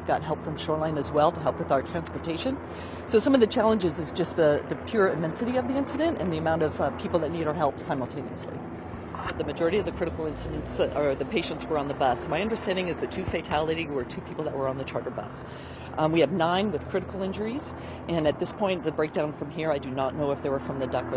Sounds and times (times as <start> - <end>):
Speech: 0.0 - 8.6, 9.2 - 21.1.